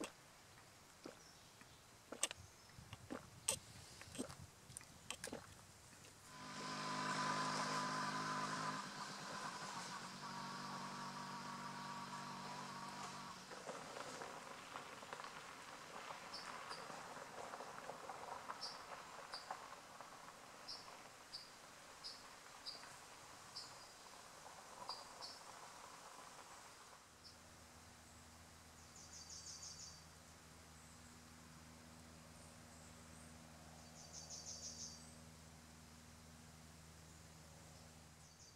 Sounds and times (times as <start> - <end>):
Insect: 9.4 - 38.5.